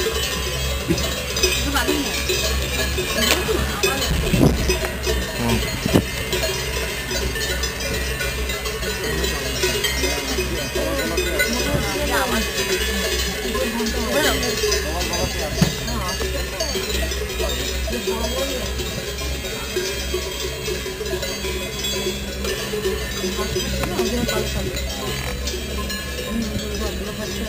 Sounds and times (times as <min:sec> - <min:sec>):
Speech: 0:03.0 - 0:04.4, 0:05.3 - 0:05.8, 0:08.8 - 0:27.4.